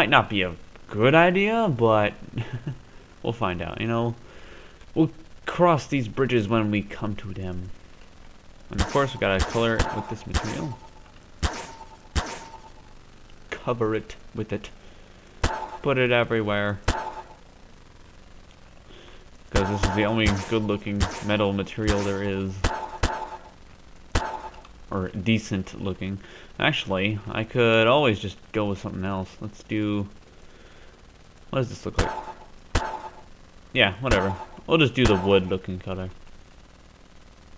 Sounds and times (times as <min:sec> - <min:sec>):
Speech: 0:00.0 - 0:02.2, 0:03.2 - 0:04.2, 0:05.0 - 0:07.8, 0:08.7 - 0:10.8, 0:13.5 - 0:14.7, 0:15.8 - 0:16.8, 0:19.5 - 0:22.6, 0:24.9 - 0:30.2, 0:31.5 - 0:32.1, 0:33.8 - 0:36.2.